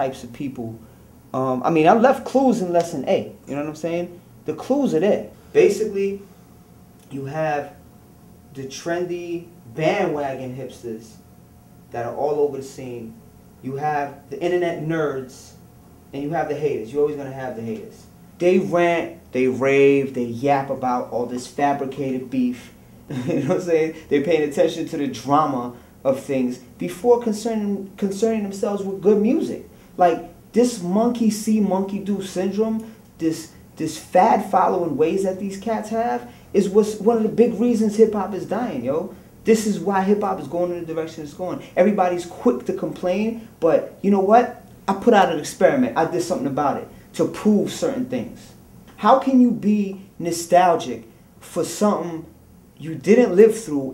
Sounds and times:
Speech: 0.0s - 6.3s, 7.0s - 7.8s, 8.5s - 11.2s, 11.9s - 53.9s.

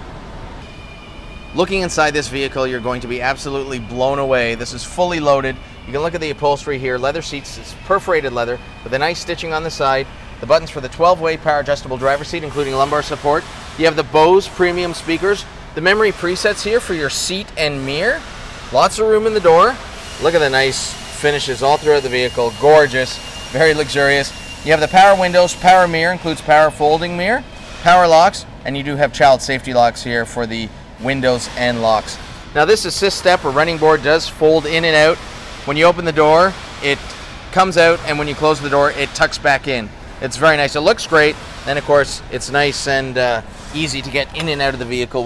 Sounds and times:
Speech: 1.6s - 45.2s.

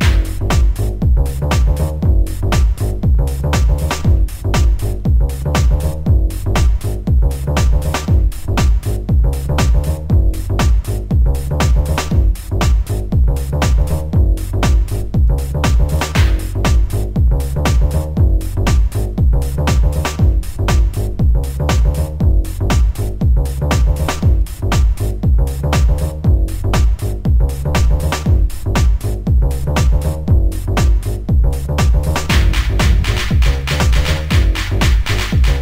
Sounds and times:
Music: 0.0s - 35.6s.

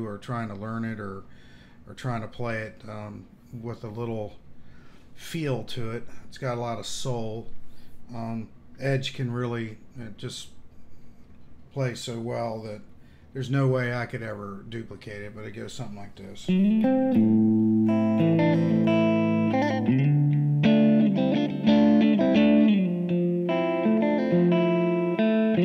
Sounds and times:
Speech: 0.0s - 1.3s, 1.9s - 4.4s, 5.2s - 10.6s, 11.7s - 16.6s
Strum: 16.5s - 25.6s.

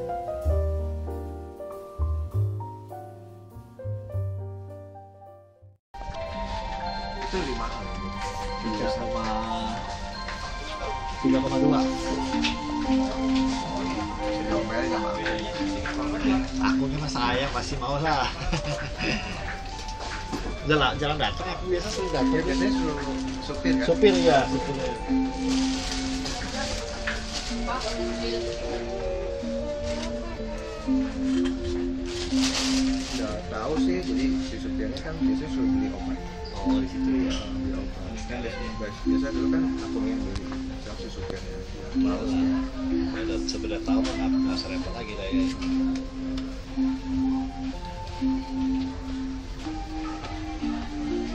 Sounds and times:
Music: 0.0s - 51.3s.

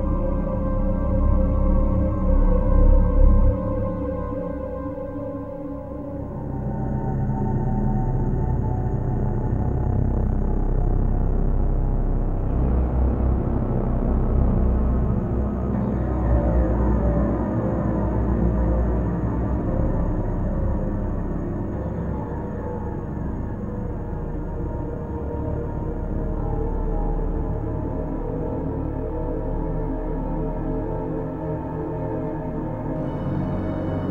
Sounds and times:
Scary music: 0.0s - 34.1s.

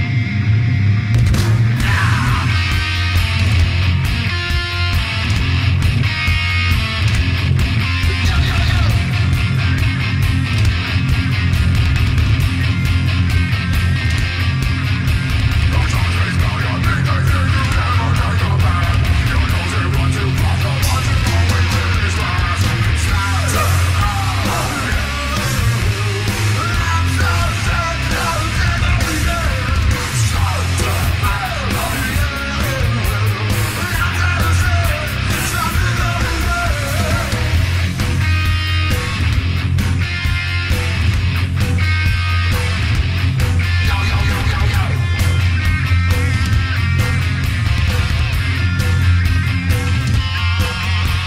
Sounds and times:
Music: 0.0s - 51.2s.

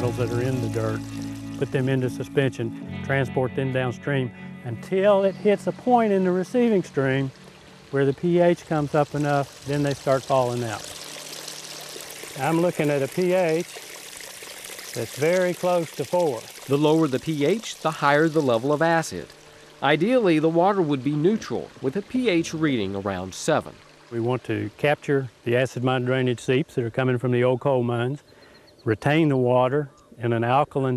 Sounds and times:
Speech: 0.0s - 1.0s, 1.6s - 7.3s, 8.0s - 10.9s, 12.4s - 13.8s, 15.0s - 28.2s, 28.9s - 30.9s
Stream: 5.5s - 26.6s.

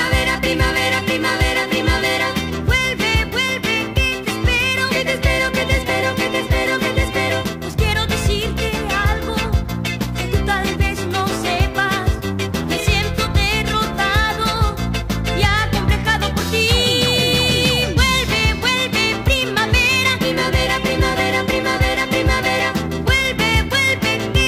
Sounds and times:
Rock and roll: 0.0s - 24.4s.

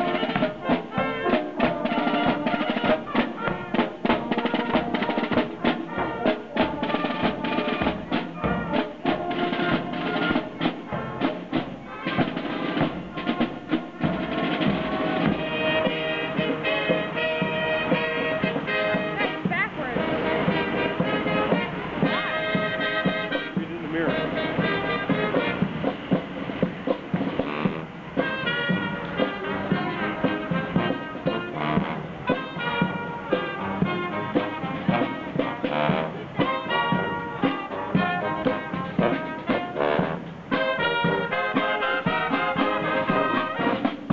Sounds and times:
Music: 0.0s - 44.1s
Speech: 19.0s - 20.1s, 23.6s - 24.3s.

